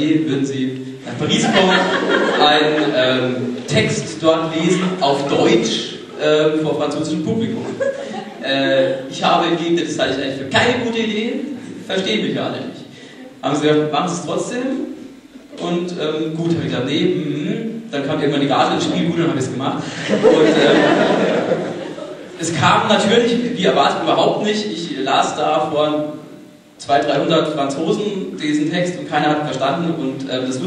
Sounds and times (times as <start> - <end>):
Speech: 0.0 - 20.7, 22.4 - 26.2, 26.8 - 30.6.